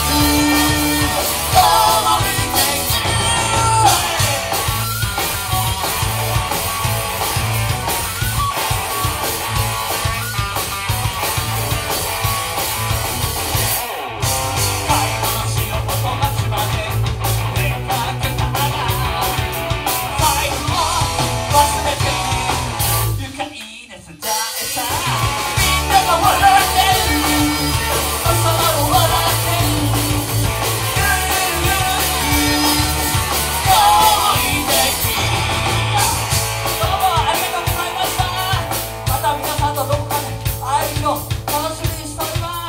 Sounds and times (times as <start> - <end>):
Singing: 0.0 - 4.6, 20.2 - 42.6
Rock and roll: 0.0 - 42.6.